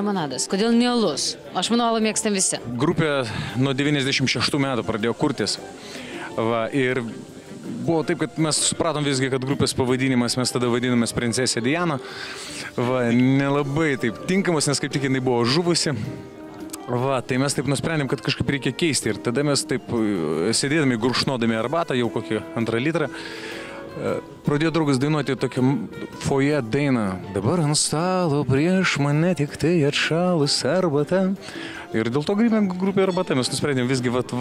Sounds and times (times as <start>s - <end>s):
Music: 0.0s - 34.4s
Speech: 7.8s - 12.0s, 12.8s - 16.0s, 24.0s - 31.4s, 32.0s - 34.4s.